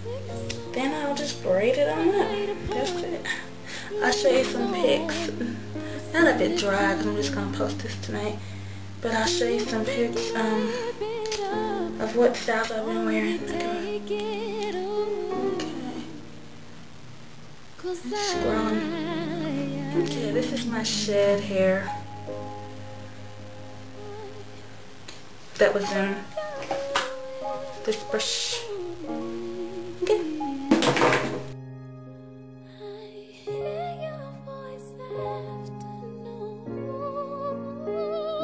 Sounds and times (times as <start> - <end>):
Inside, small room: 0.0 - 38.4
Music: 0.0 - 38.4
Speech: 20.0 - 21.9, 25.6 - 26.4, 27.8 - 28.8.